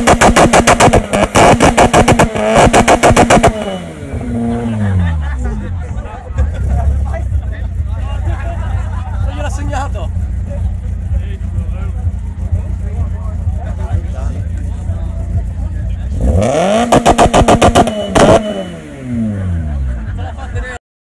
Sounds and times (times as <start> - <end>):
Speech: 4.6 - 16.4.